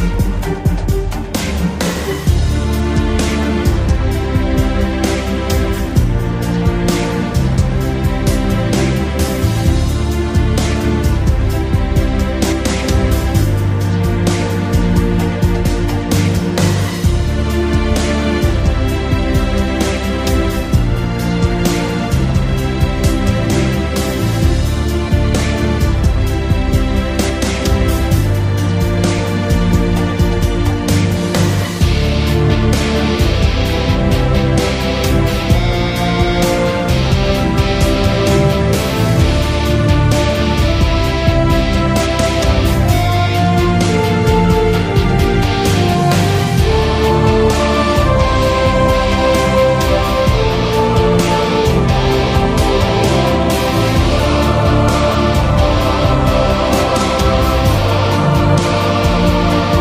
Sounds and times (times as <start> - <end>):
Music: 0.0 - 59.8.